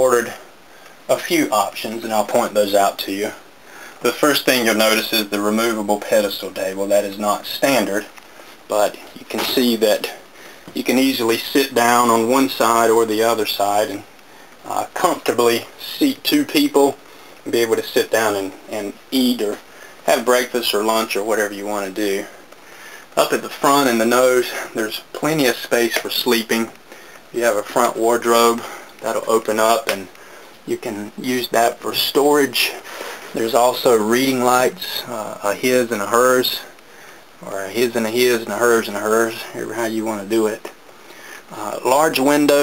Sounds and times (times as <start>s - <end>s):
Speech: 0.0s - 0.5s, 1.1s - 8.1s, 8.7s - 22.4s, 23.2s - 36.8s, 37.4s - 40.8s, 41.5s - 42.6s.